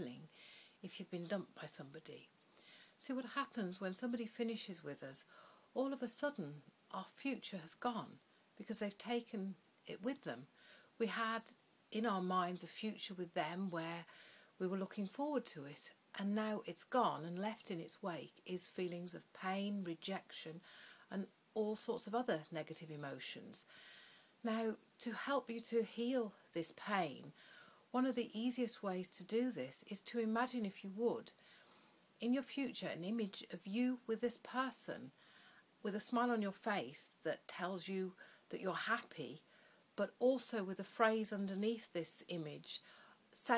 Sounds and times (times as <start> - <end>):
Speech: 0.0 - 2.3, 3.0 - 23.7, 24.4 - 27.3, 27.9 - 31.4, 32.2 - 35.1, 35.8 - 39.4, 40.0 - 42.8, 43.4 - 43.5.